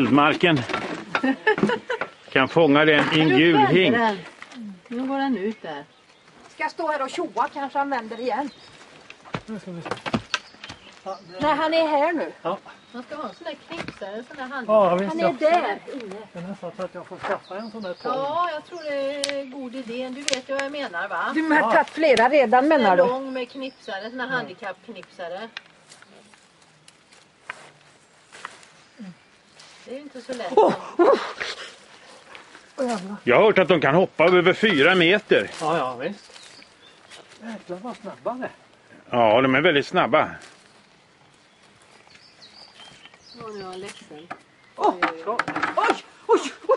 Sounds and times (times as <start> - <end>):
Outside, rural or natural: 0.0 - 46.7.